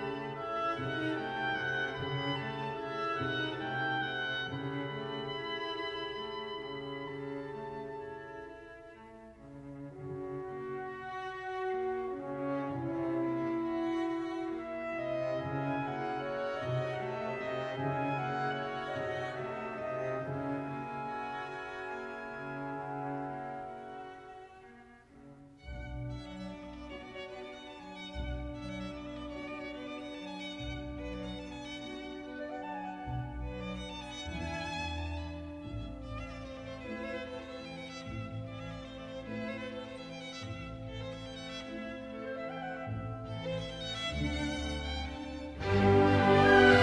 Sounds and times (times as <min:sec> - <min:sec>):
Music: 0:00.0 - 0:46.8.